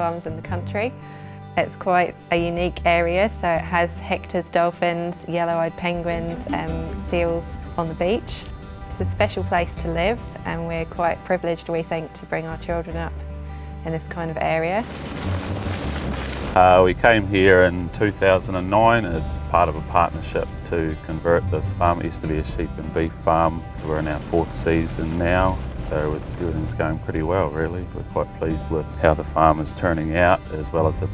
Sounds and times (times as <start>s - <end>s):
Music: 0.0s - 31.1s
Speech: 5.4s - 8.3s, 16.6s - 31.1s.